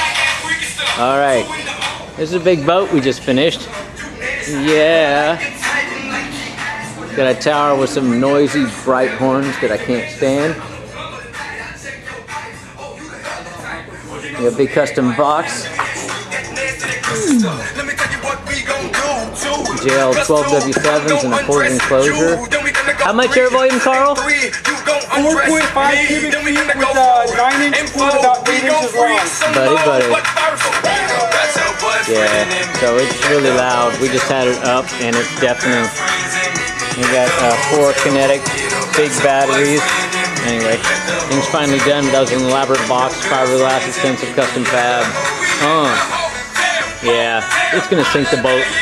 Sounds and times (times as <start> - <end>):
Music: 0.0 - 48.8
Speech: 27.2 - 30.2, 32.1 - 35.9, 40.4 - 46.1, 47.0 - 48.8.